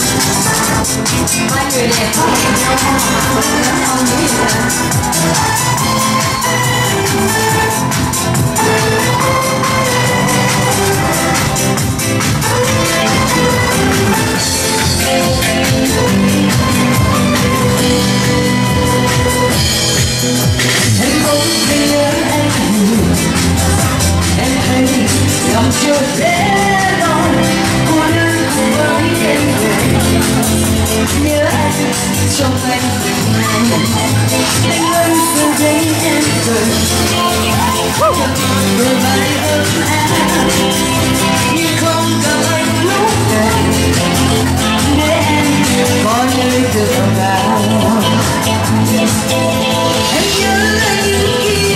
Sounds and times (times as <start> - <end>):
Techno: 0.0 - 51.7.